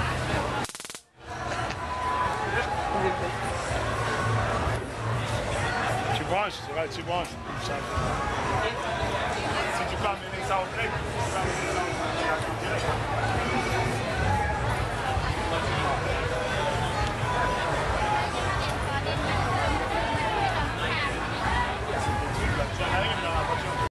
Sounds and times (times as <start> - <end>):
Music: 0.0 - 0.6, 1.2 - 23.9.